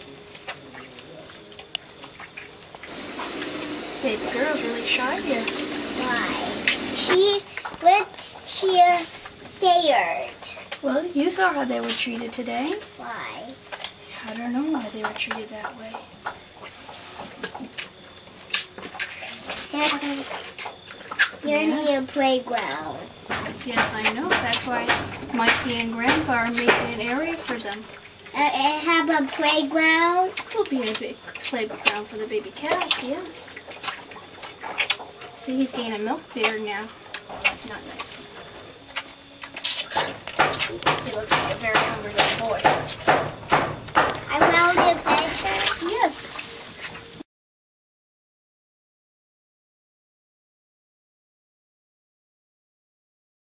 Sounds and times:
Speech: 4.0 - 16.0, 19.5 - 20.4, 21.4 - 23.0, 23.6 - 33.6, 35.4 - 36.9, 40.7 - 42.7, 44.3 - 46.4.

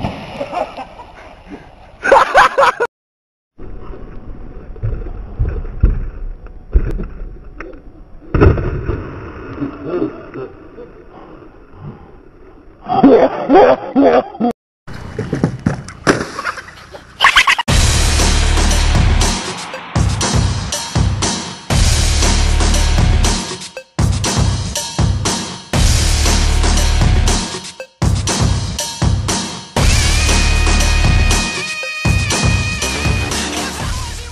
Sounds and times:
Music: 17.7 - 34.3.

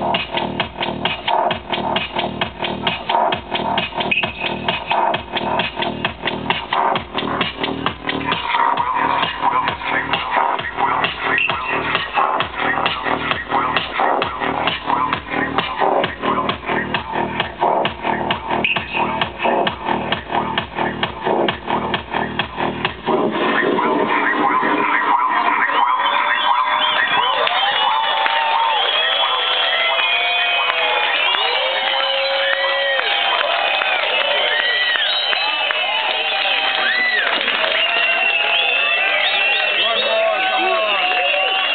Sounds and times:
Music: 0.0 - 41.7.

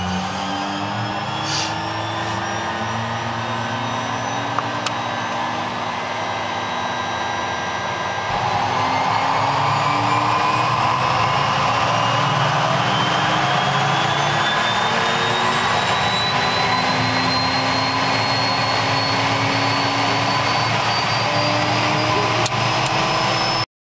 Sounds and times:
Heavy engine (low frequency): 0.0 - 23.7
Jet engine: 0.0 - 23.7.

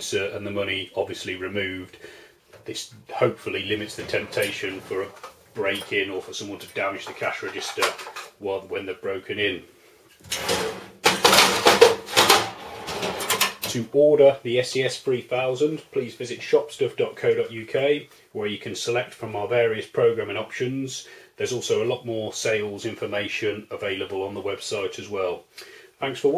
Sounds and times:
Speech: 0.0 - 2.0, 2.6 - 9.7, 13.6 - 26.3
Drawer open or close: 3.7 - 6.1, 10.2 - 13.8.

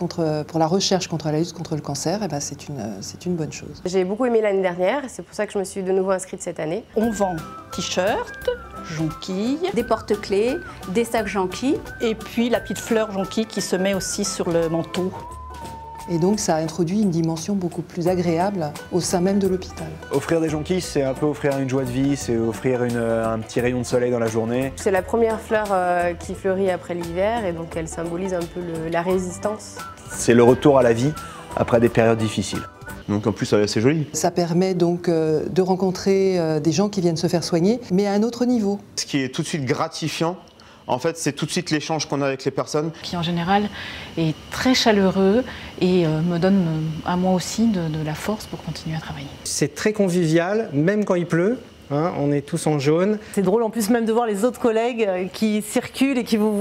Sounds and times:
Music: 0.0 - 56.6.

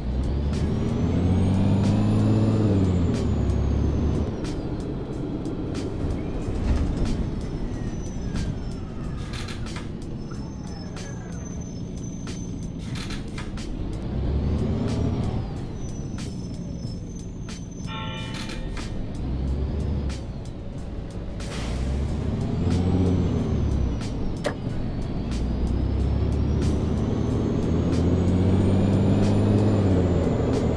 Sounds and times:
Bus: 0.0 - 30.7
Music: 0.0 - 30.7.

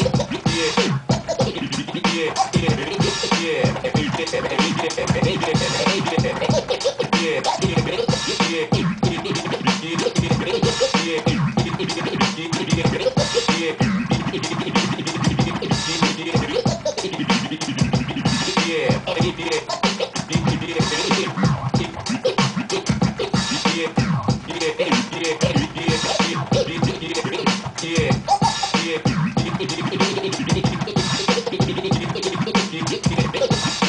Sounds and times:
Electronic music: 0.0 - 33.8
Hip hop music: 0.0 - 33.8
Scratching (performance technique): 0.0 - 33.8.

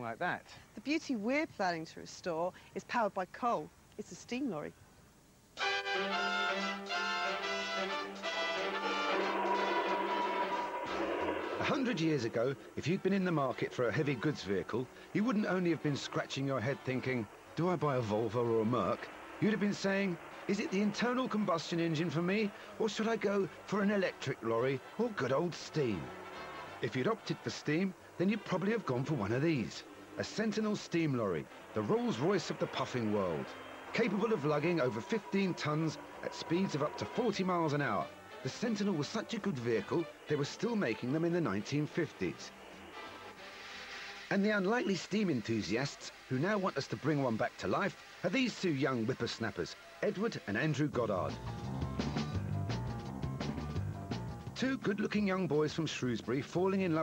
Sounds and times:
Speech: 0.0 - 4.8, 11.6 - 26.1, 26.8 - 42.5, 44.3 - 51.4, 54.6 - 57.0
Music: 5.6 - 57.0.

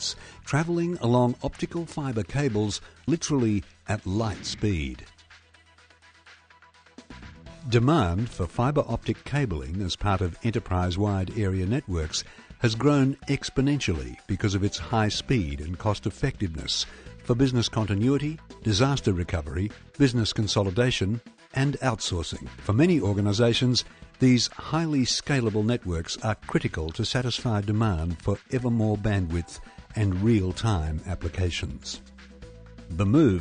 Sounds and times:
Speech: 0.0 - 5.1, 7.6 - 32.0, 32.9 - 33.4
Music: 0.0 - 33.4.

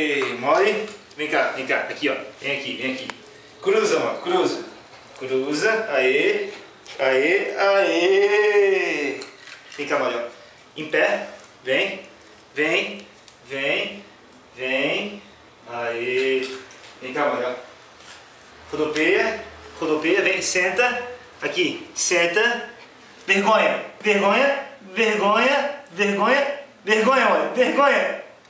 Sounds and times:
Speech: 0.0 - 17.7, 18.7 - 28.4.

